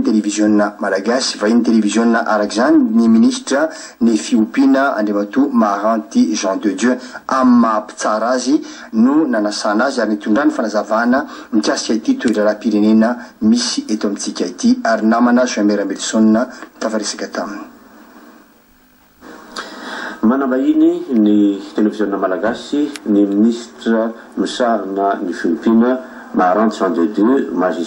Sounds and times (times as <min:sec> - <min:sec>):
Speech: 0:00.0 - 0:17.8, 0:20.2 - 0:27.8.